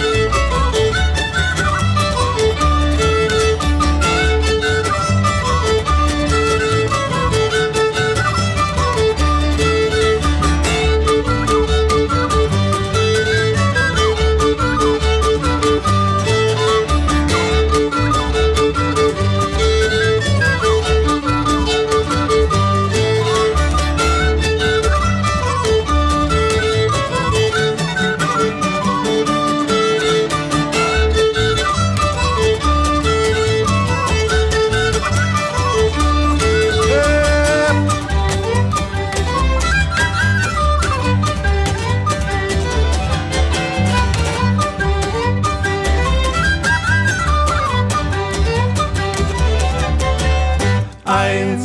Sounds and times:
Violin, fiddle: 0.0s - 51.6s.

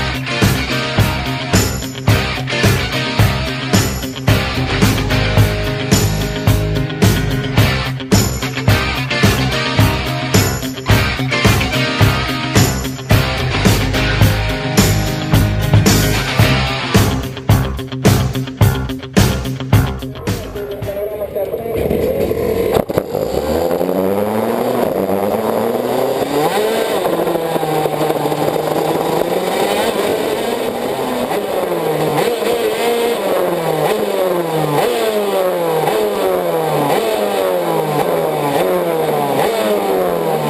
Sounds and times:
Music: 0.0s - 22.1s.

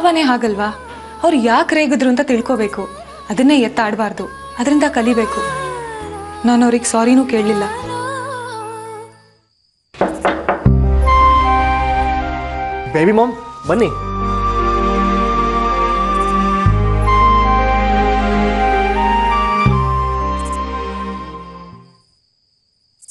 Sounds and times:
Music: 0.0s - 22.0s.

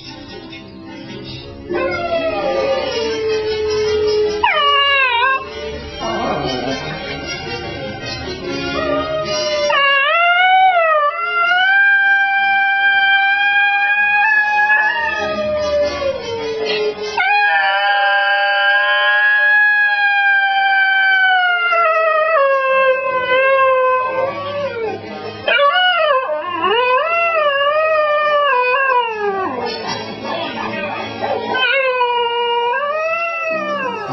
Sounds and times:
Music: 0.0s - 34.1s
Howl: 1.7s - 7.1s, 8.5s - 34.1s.

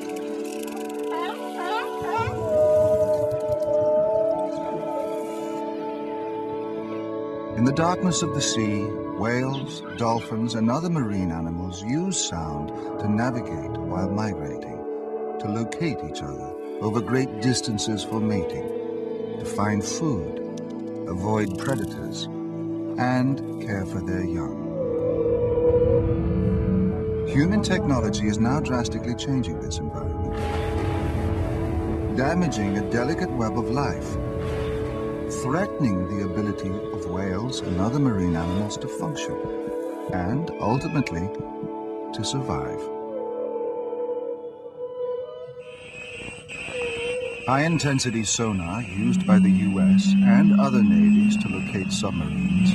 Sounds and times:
Music: 0.0s - 52.7s
Speech: 7.6s - 14.8s, 15.4s - 18.6s, 19.4s - 20.4s, 21.1s - 22.3s, 23.0s - 24.6s, 27.3s - 30.3s, 32.2s - 34.1s, 35.4s - 39.4s, 40.1s - 41.5s, 42.2s - 42.8s, 47.5s - 52.7s.

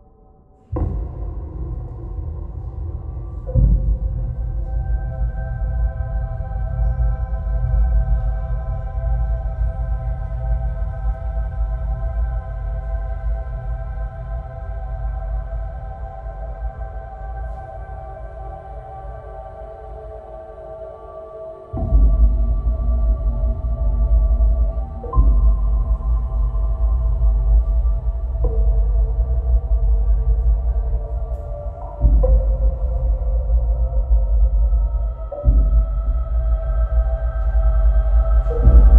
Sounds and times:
Music: 0.0s - 38.9s.

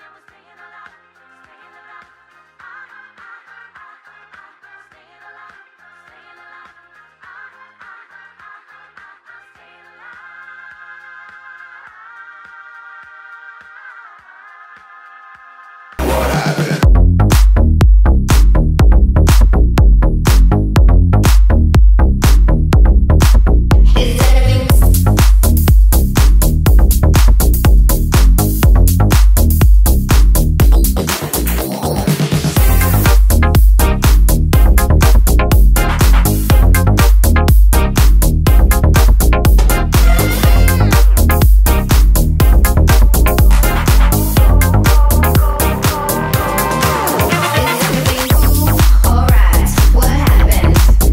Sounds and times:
Background music: 23.2s - 51.1s.

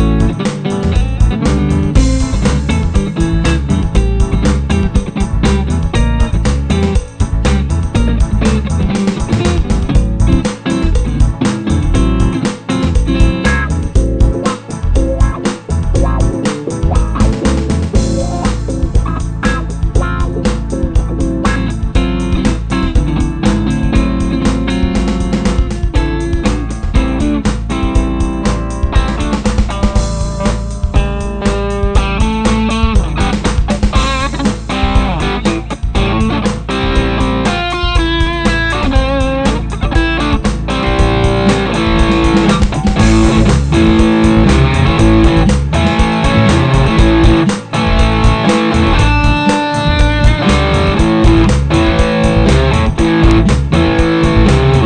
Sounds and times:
Electric guitar: 0.0s - 54.8s
Rock music: 0.0s - 54.8s.

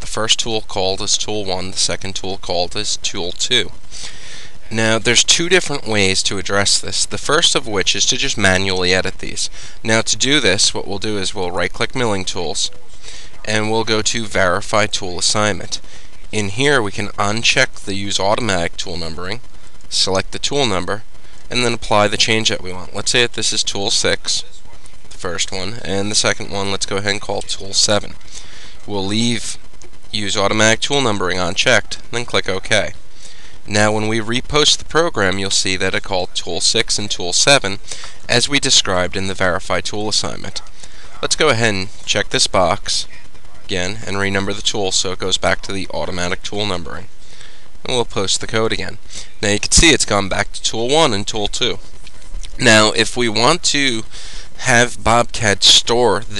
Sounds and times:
Speech: 0.0s - 3.8s, 4.6s - 28.2s, 28.8s - 33.0s, 33.7s - 47.1s, 47.8s - 51.8s, 52.5s - 56.3s.

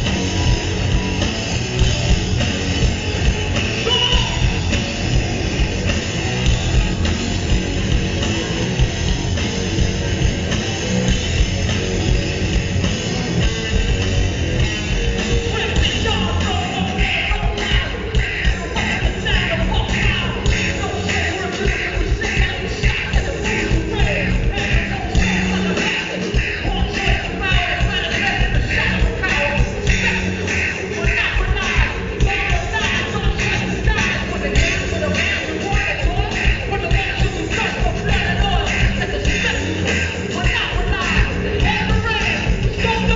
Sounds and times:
Music: 0.0s - 43.1s.

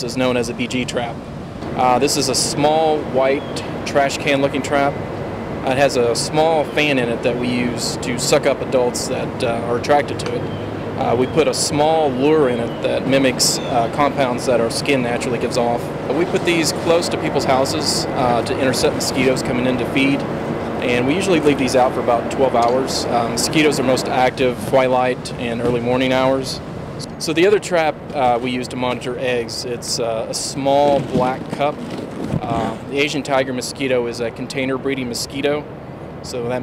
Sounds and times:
Speech: 0.0s - 1.2s, 1.8s - 5.0s, 5.6s - 10.4s, 11.0s - 20.2s, 20.8s - 31.8s, 32.4s - 36.6s.

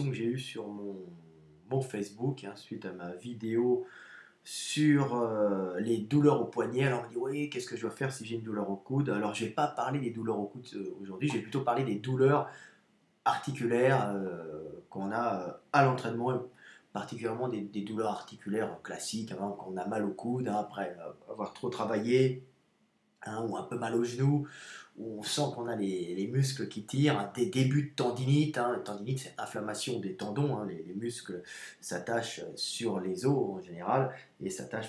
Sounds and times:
Speech: 0.0s - 12.6s, 13.3s - 22.5s, 23.2s - 34.8s.

